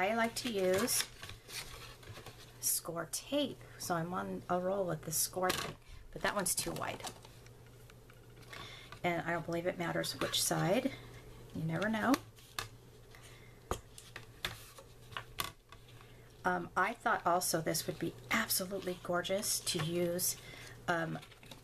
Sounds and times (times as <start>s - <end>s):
Speech: 0.0s - 1.1s, 2.6s - 7.2s, 9.0s - 11.0s, 11.6s - 12.2s, 16.4s - 21.3s
Inside, small room: 0.0s - 21.6s.